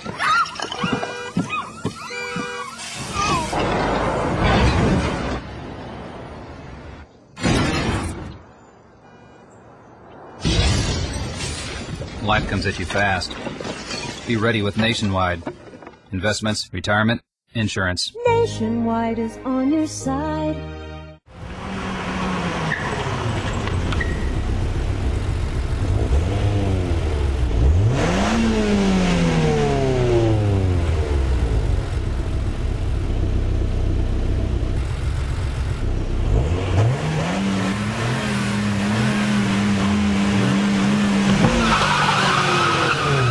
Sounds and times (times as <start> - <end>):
Outside, urban or manmade: 0.0 - 43.3
Car: 21.3 - 43.3.